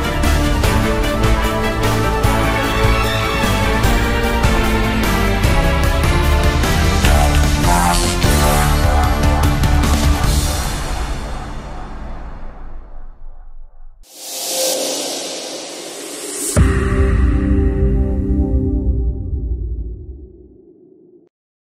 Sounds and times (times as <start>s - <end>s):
Music: 0.0s - 13.4s, 14.0s - 20.2s.